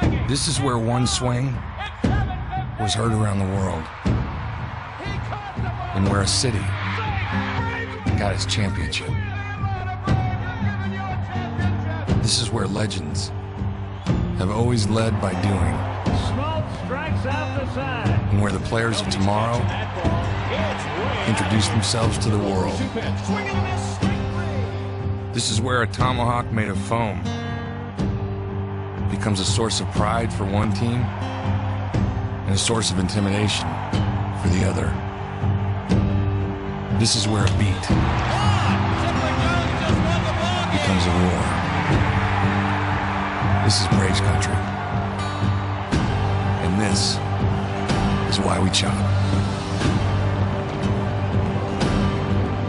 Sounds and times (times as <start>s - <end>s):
Speech: 0.0s - 3.9s, 5.3s - 13.3s, 14.4s - 24.7s, 25.4s - 27.3s, 29.1s - 31.1s, 32.5s - 33.8s, 34.4s - 35.0s, 37.0s - 37.9s, 39.0s - 41.6s, 43.6s - 44.6s, 46.6s - 47.2s, 48.3s - 49.1s
Music: 0.0s - 52.6s.